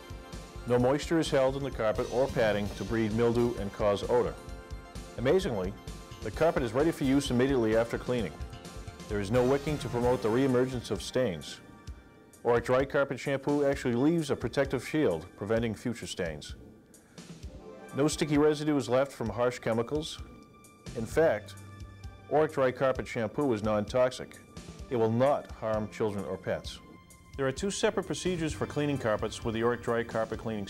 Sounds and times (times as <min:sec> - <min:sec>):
Music: 0:00.0 - 0:30.7
Speech: 0:00.7 - 0:04.4, 0:05.2 - 0:08.4, 0:09.1 - 0:11.6, 0:12.4 - 0:16.6, 0:18.0 - 0:20.3, 0:21.0 - 0:21.6, 0:22.3 - 0:26.8, 0:27.4 - 0:30.7.